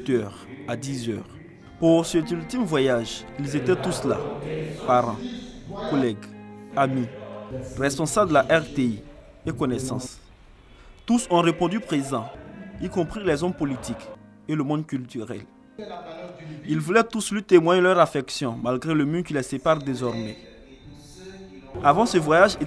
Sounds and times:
Speech: 0:00.0 - 0:07.1, 0:07.7 - 0:10.3, 0:11.1 - 0:22.6
Music: 0:00.0 - 0:22.6.

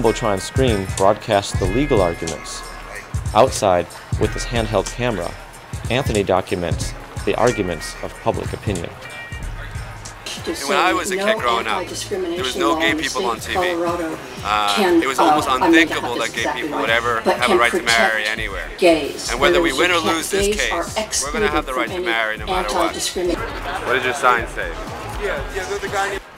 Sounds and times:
Male speech, man speaking: 0:00.0 - 0:09.8, 0:10.4 - 0:26.2
Narration, monologue: 0:00.0 - 0:24.6
Music: 0:00.0 - 0:26.3
Female speech, woman speaking: 0:10.3 - 0:18.2, 0:18.8 - 0:23.6.

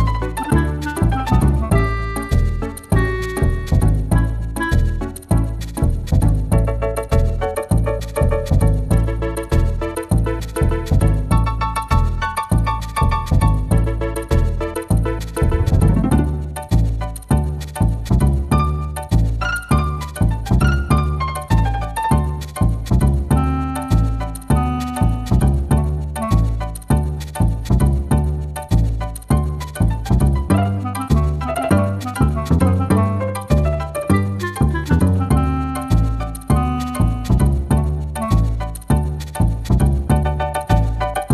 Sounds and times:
Soundtrack music: 0:00.0 - 0:26.8, 0:29.1 - 0:41.3
Theme music: 0:15.4 - 0:16.5, 0:18.6 - 0:22.8.

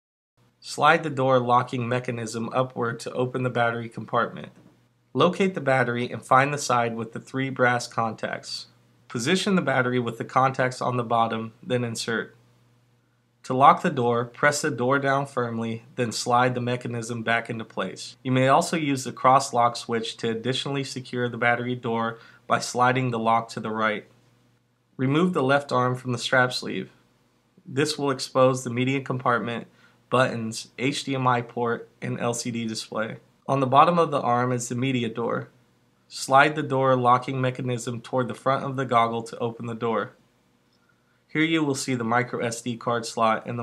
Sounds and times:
Speech: 0:00.6 - 0:12.4, 0:13.4 - 0:24.2, 0:25.0 - 0:27.0, 0:27.6 - 0:40.2, 0:41.3 - 0:43.6.

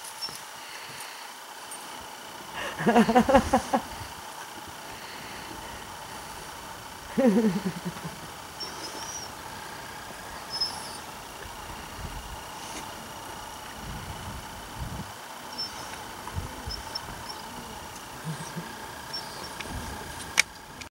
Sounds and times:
Animal: 0:08.6 - 0:13.0, 0:15.5 - 0:20.3.

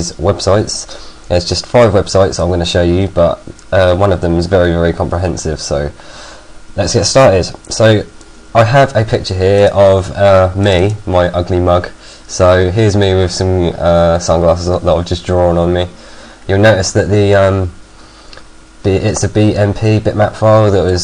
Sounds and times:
Speech: 0:00.0 - 0:06.0, 0:06.8 - 0:17.8, 0:18.8 - 0:21.0.

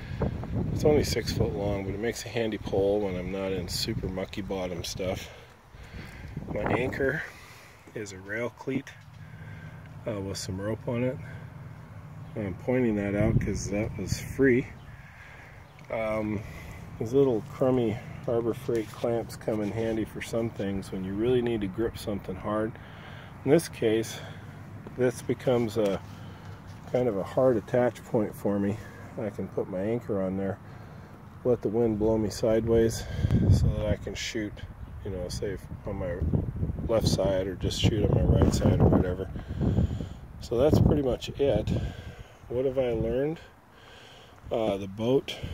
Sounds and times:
Outside, urban or manmade: 0:00.0 - 0:45.5
Speech: 0:00.8 - 0:05.4, 0:06.5 - 0:07.3, 0:07.9 - 0:09.0, 0:10.0 - 0:11.4, 0:12.3 - 0:14.8, 0:15.8 - 0:22.8, 0:23.4 - 0:24.4, 0:25.0 - 0:26.0, 0:26.9 - 0:30.6, 0:31.4 - 0:39.3, 0:40.4 - 0:41.9, 0:42.5 - 0:43.5, 0:44.5 - 0:45.5.

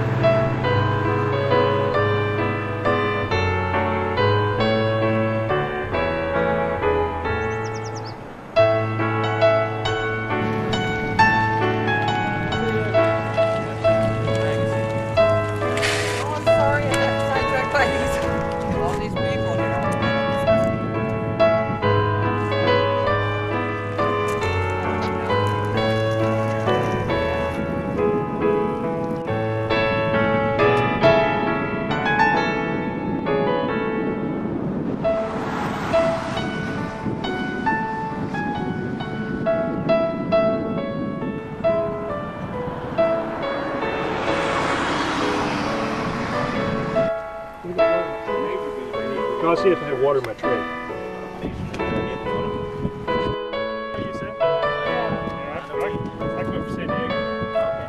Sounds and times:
Music: 0:00.0 - 0:57.8.

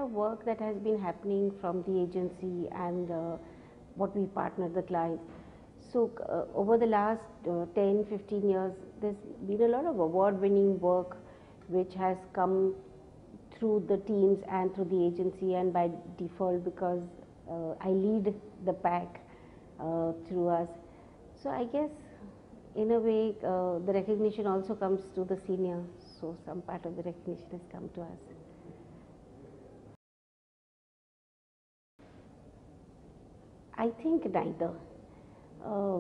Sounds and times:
Speech: 0:00.0 - 0:03.4, 0:04.0 - 0:12.8, 0:13.4 - 0:19.2, 0:19.8 - 0:20.8, 0:21.4 - 0:29.8, 0:33.8 - 0:34.9, 0:35.6 - 0:36.0.

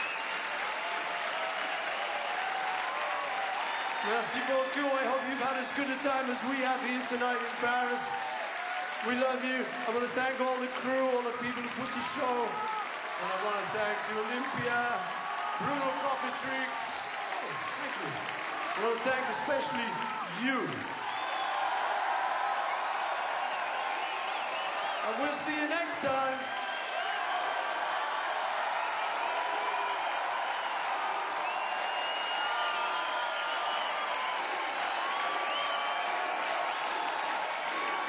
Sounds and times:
Male speech, man speaking: 0:04.0 - 0:08.2, 0:09.0 - 0:12.6, 0:13.2 - 0:17.1, 0:18.8 - 0:20.9, 0:25.0 - 0:26.5.

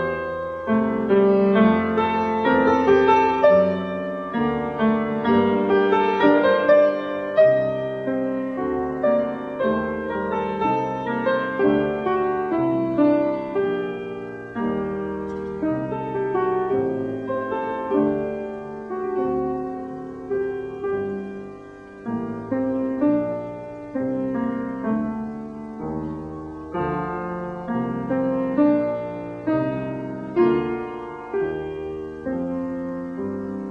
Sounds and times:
Classical music: 0:00.0 - 0:33.7.

